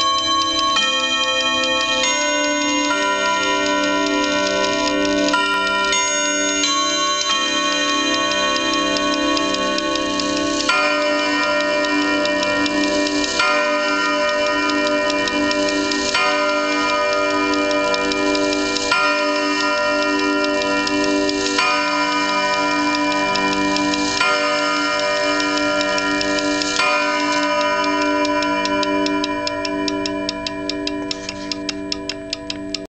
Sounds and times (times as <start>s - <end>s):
Tick-tock: 0.0s - 32.8s
Tick: 25.4s - 32.8s.